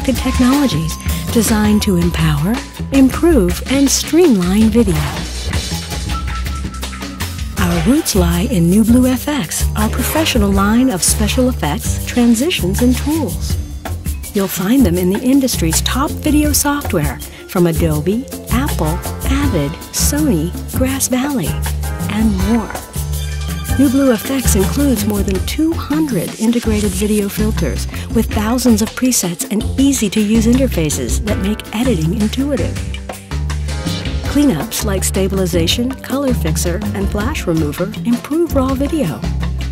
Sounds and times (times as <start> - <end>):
Speech: 0.0 - 5.2, 7.6 - 13.5, 14.4 - 22.8, 23.8 - 32.8, 34.3 - 39.3
Music: 0.0 - 39.7.